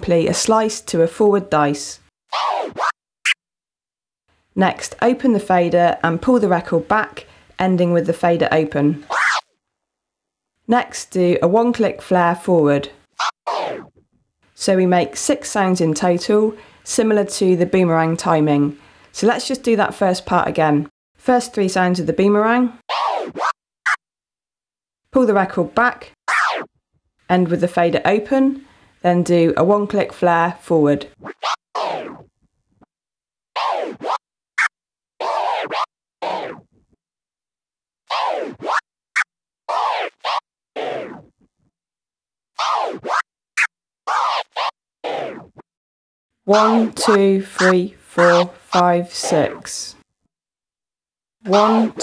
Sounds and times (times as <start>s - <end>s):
Speech: 0.0s - 2.0s, 4.6s - 9.0s, 10.7s - 13.0s, 14.6s - 22.8s, 25.1s - 26.2s, 27.3s - 31.1s, 46.5s - 50.0s, 51.4s - 52.0s
Scratching (performance technique): 31.2s - 32.3s, 33.6s - 36.9s, 38.1s - 41.5s, 42.6s - 45.6s, 46.5s - 49.8s.